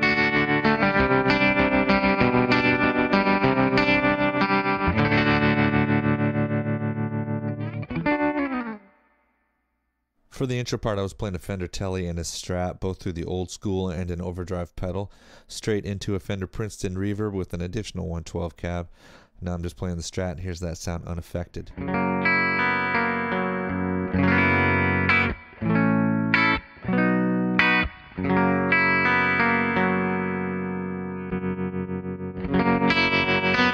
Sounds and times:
Rock music: 0:00.0 - 0:09.0, 0:21.8 - 0:33.7
Electric guitar: 0:00.0 - 0:09.2, 0:21.7 - 0:33.7
Effects unit: 0:00.0 - 0:10.1, 0:21.6 - 0:33.7
Distortion: 0:00.0 - 0:33.7.

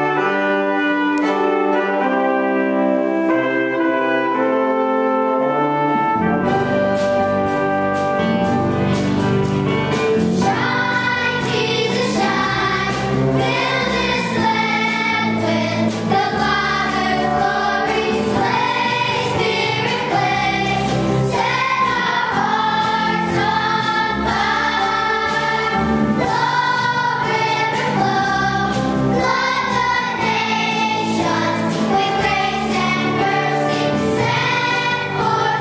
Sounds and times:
Brass instrument: 0:00.0 - 0:35.6
Choir: 0:10.5 - 0:35.6.

